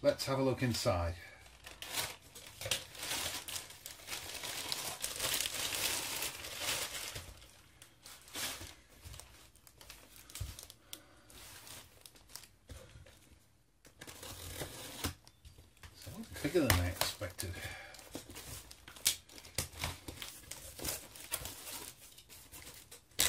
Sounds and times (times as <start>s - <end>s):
Speech: 0.0s - 1.4s, 16.0s - 17.8s
Inside, small room: 0.0s - 23.2s
Crumpling, crinkling: 1.3s - 13.3s, 14.0s - 23.2s.